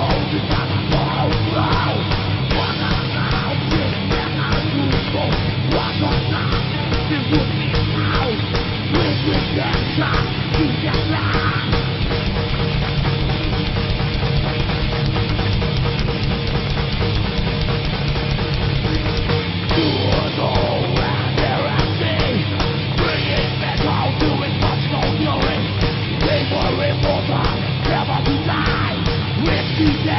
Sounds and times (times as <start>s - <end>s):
Heavy metal: 0.0s - 30.1s.